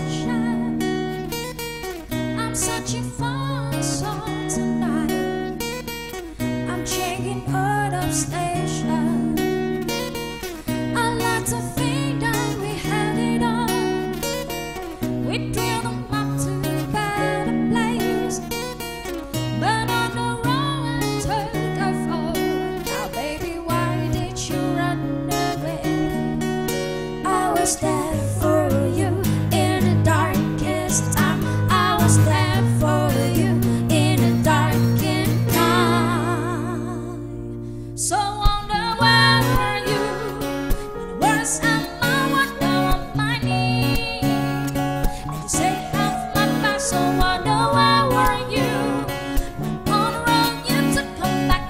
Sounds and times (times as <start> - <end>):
Acoustic guitar: 0.0 - 51.6.